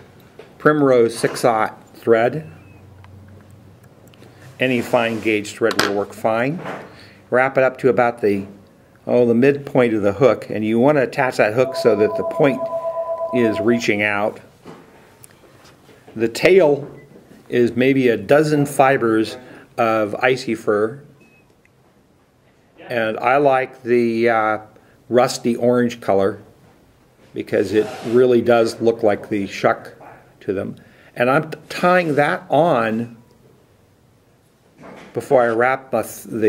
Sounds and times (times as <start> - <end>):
Speech: 0.6 - 2.6, 4.6 - 6.6, 7.3 - 14.4, 16.2 - 16.9, 17.5 - 21.1, 22.8 - 26.5, 27.4 - 33.2, 35.1 - 36.4.